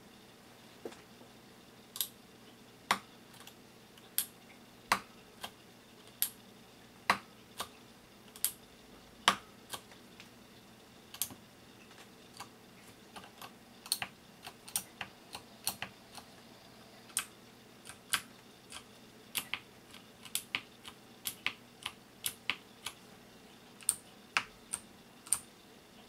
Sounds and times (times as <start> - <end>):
Computer keyboard: 13.2 - 15.9, 17.9 - 23.0.